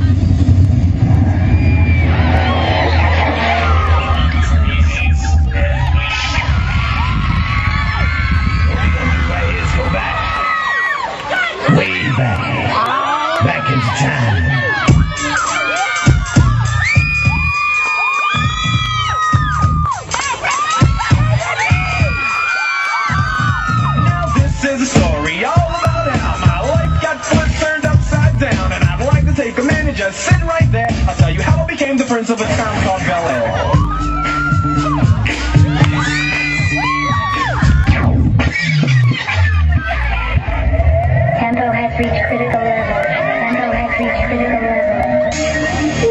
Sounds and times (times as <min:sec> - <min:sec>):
Scratching (performance technique): 0:14.7 - 0:44.0.